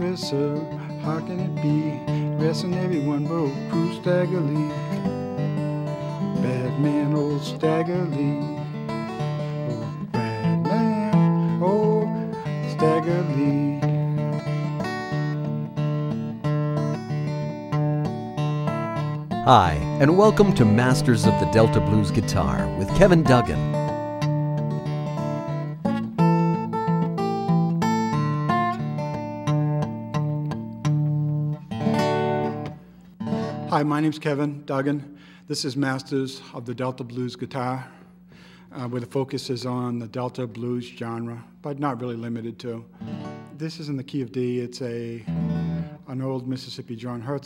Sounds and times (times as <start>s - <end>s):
Blues: 0.0s - 33.7s
Speech: 19.5s - 23.8s, 33.7s - 38.0s, 38.8s - 42.9s, 43.6s - 45.3s, 46.1s - 47.4s.